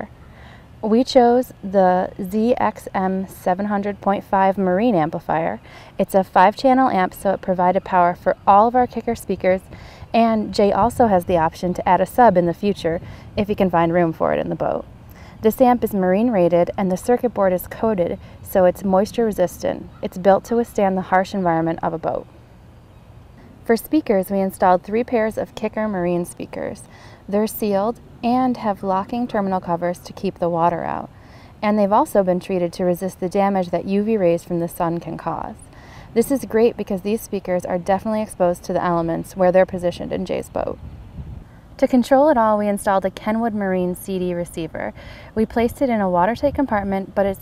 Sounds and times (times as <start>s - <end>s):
Speech: 0.8s - 22.2s, 23.6s - 40.8s, 41.8s - 47.4s.